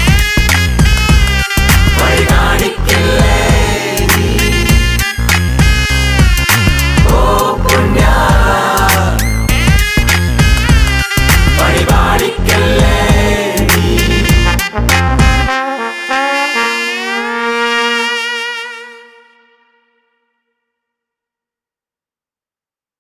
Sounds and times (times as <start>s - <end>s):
Trombone: 0.0s - 8.2s, 9.5s - 19.4s
Trumpet: 0.0s - 20.5s.